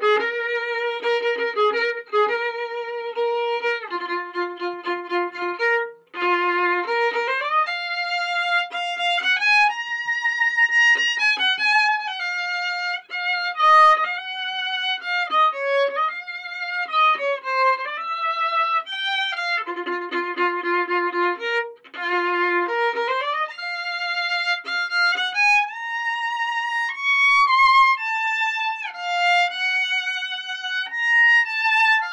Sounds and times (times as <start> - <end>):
Violin, fiddle: 0.0 - 32.1.